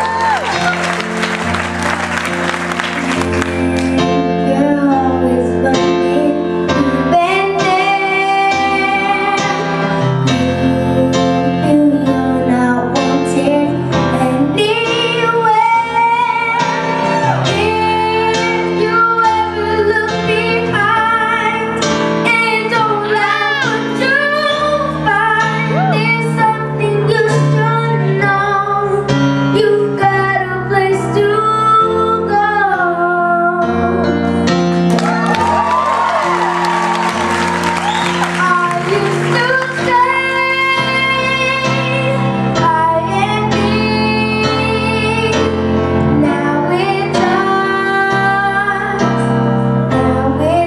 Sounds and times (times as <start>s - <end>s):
Music: 0.0s - 50.6s
Child singing: 3.8s - 16.9s, 17.5s - 34.0s, 38.4s - 45.5s, 46.1s - 49.1s, 49.9s - 50.6s.